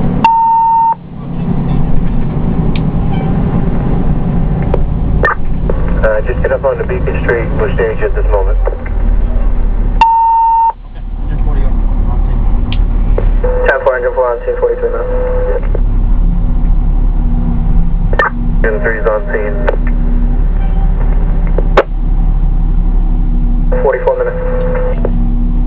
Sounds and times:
Engine: 0:00.0 - 0:25.6
Outside, urban or manmade: 0:00.0 - 0:25.6
Vehicle: 0:00.0 - 0:25.6
Radio: 0:06.0 - 0:08.9, 0:13.3 - 0:15.8, 0:18.2 - 0:20.0, 0:23.7 - 0:25.2
Speech: 0:06.0 - 0:09.5, 0:13.6 - 0:15.6, 0:18.6 - 0:19.8, 0:23.7 - 0:24.6.

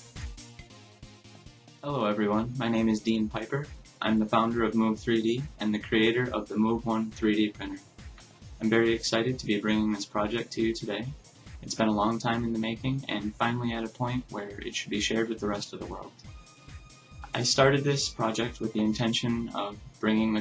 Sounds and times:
Music: 0:00.0 - 0:20.4
Speech: 0:01.9 - 0:07.8, 0:08.6 - 0:16.2, 0:17.3 - 0:20.4.

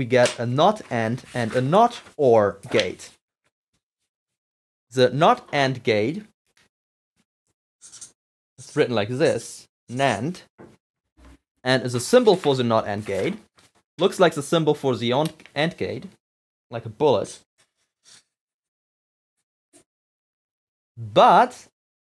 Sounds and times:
Speech: 0:00.0 - 0:03.2, 0:04.9 - 0:06.3, 0:08.6 - 0:10.5, 0:11.7 - 0:17.5, 0:21.0 - 0:21.7.

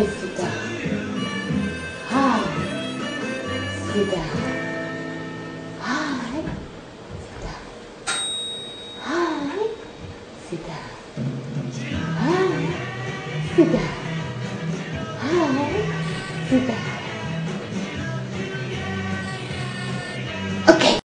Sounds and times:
Music: 0:00.0 - 0:06.1, 0:11.2 - 0:21.0
Speech: 0:02.1 - 0:02.7, 0:03.9 - 0:04.5, 0:05.8 - 0:06.6, 0:15.2 - 0:16.9.

